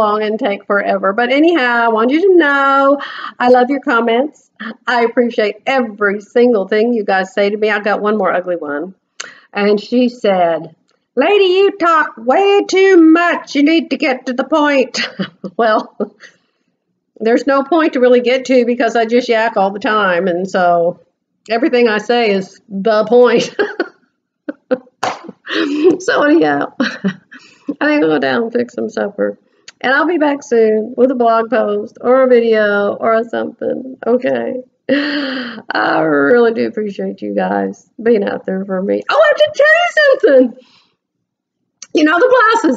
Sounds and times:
Speech: 0.0 - 16.3, 17.2 - 23.8, 25.5 - 34.7, 35.6 - 40.7, 41.8 - 42.7.

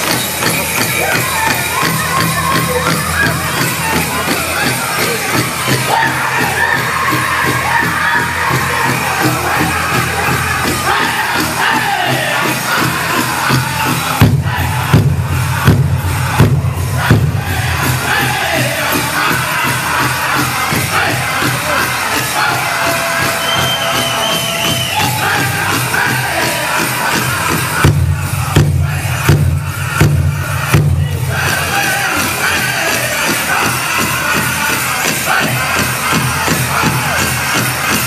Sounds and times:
Music: 0.0 - 38.0.

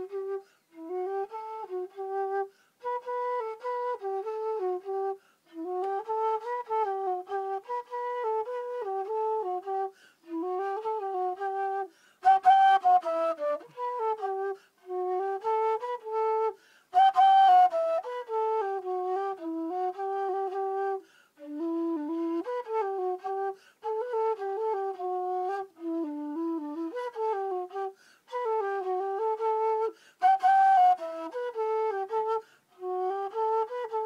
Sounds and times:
Flute: 0.0 - 34.0.

